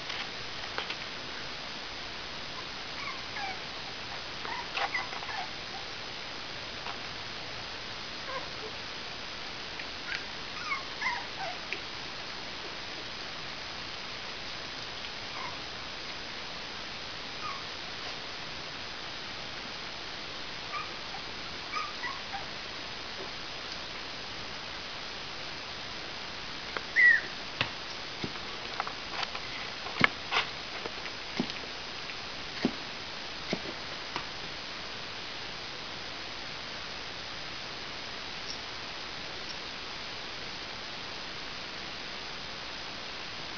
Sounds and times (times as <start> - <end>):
Inside, small room: 0.0 - 43.5
Dog: 2.6 - 3.6, 4.5 - 5.9, 10.1 - 11.6, 15.3 - 15.6, 17.4 - 17.7, 20.7 - 22.5, 27.0 - 27.3.